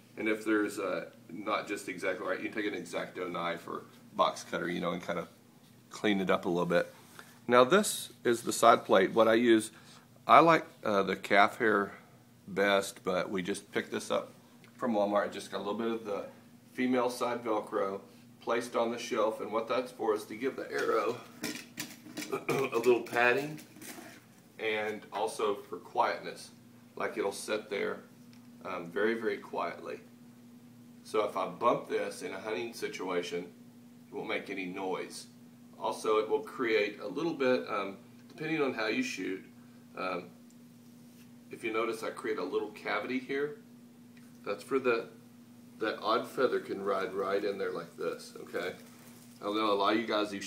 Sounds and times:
Speech: 0.2 - 6.9, 7.5 - 21.3, 22.3 - 23.7, 24.6 - 30.1, 31.0 - 40.4, 41.5 - 43.6, 44.4 - 45.2, 45.8 - 48.8, 49.4 - 50.4.

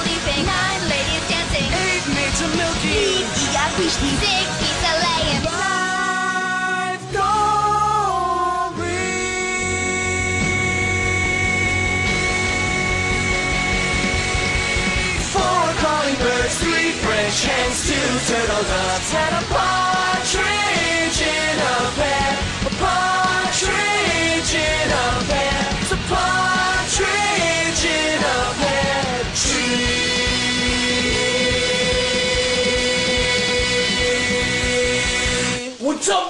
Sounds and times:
Music: 0.0 - 36.2.

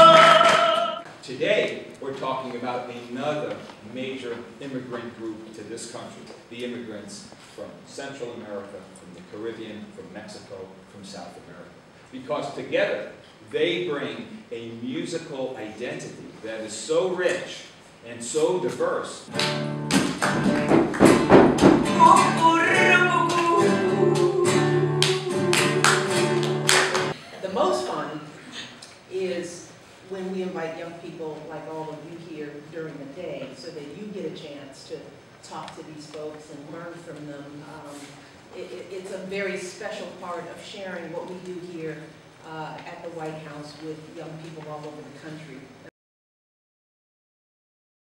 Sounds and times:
Speech: 1.2 - 19.3, 27.4 - 45.9.

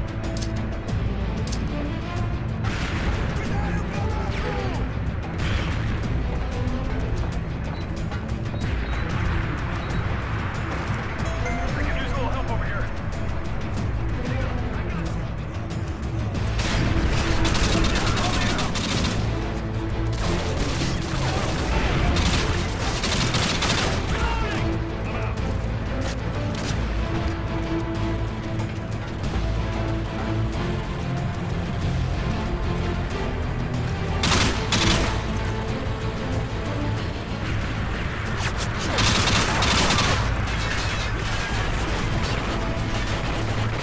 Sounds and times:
Music: 0.0 - 43.8.

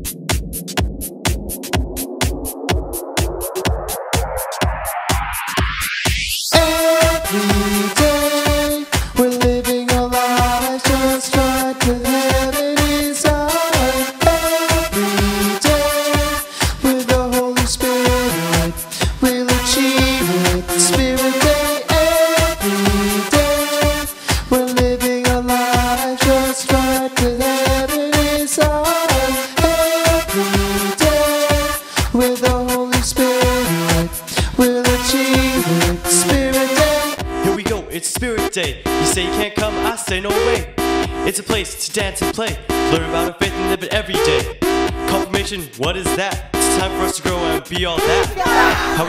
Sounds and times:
Dance music: 0.0 - 49.0
Happy music: 0.0 - 49.0
Pop music: 0.0 - 49.0.

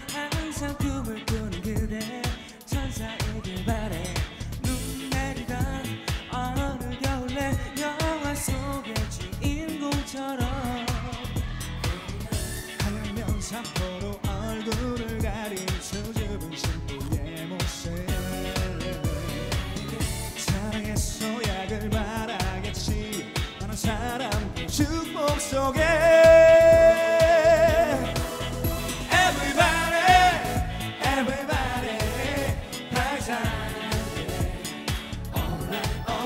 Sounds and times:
Music: 0.0 - 36.2.

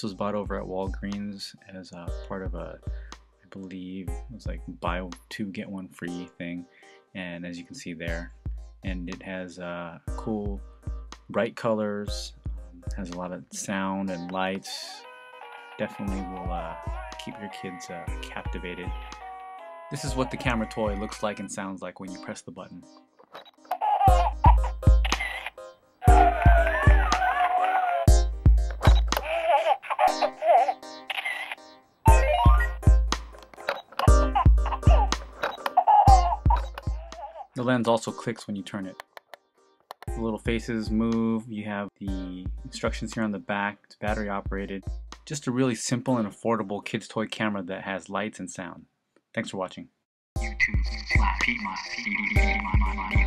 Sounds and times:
Speech: 0.0 - 2.8, 3.5 - 6.6, 7.2 - 10.6, 11.3 - 15.0, 15.8 - 19.0, 19.9 - 22.9, 37.6 - 39.0, 40.1 - 49.9, 50.5 - 53.2
Music: 0.0 - 47.0, 50.4 - 53.2.

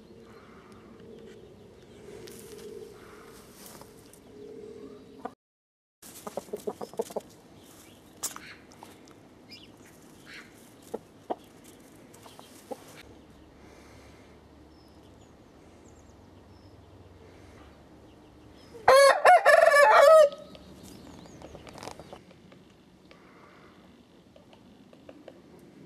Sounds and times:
Bird: 6.2 - 13.5.

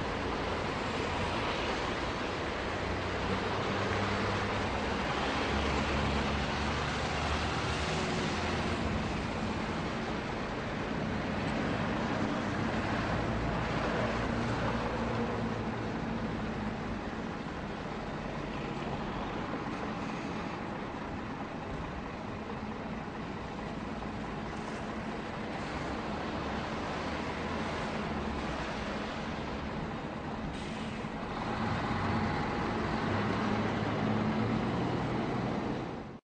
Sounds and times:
Car: 0.0 - 36.2.

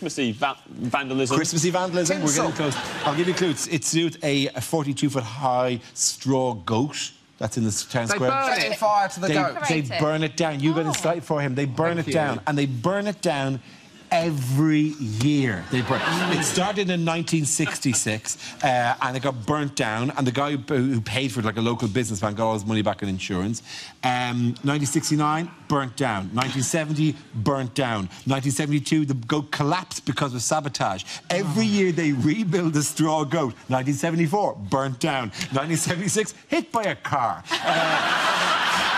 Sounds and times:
Speech: 0.0 - 37.4.

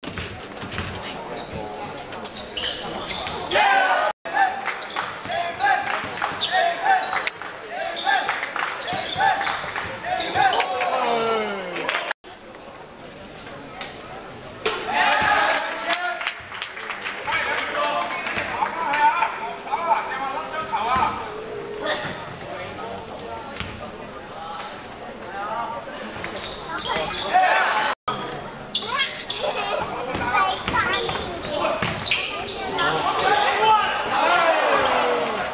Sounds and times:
Inside, public space: 0.0 - 35.5.

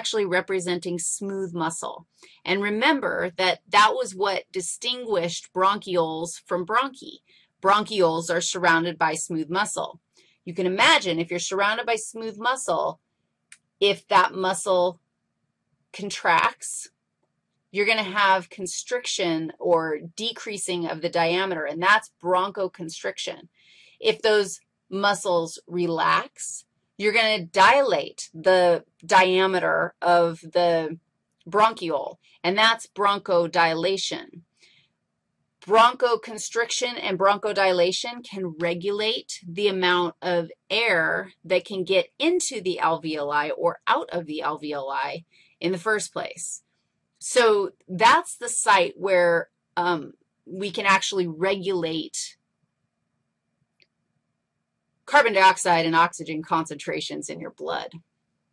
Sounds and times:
Speech: 0.0 - 13.0, 13.8 - 14.9, 16.0 - 16.9, 17.8 - 23.4, 24.0 - 34.4, 35.6 - 46.6, 47.2 - 52.3, 55.1 - 58.0.

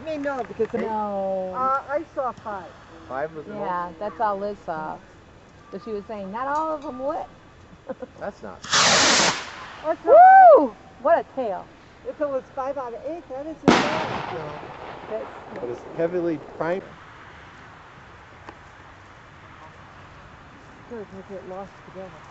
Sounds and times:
Fireworks: 8.6 - 9.9, 13.6 - 16.9.

